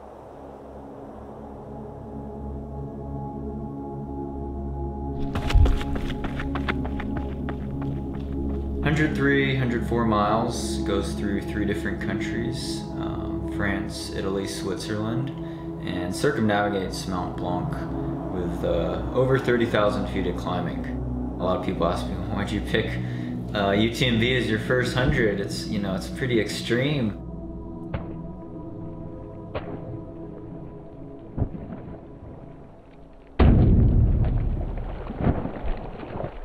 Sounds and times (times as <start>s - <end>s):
Music: 0.4s - 34.1s
Speech: 8.8s - 27.2s.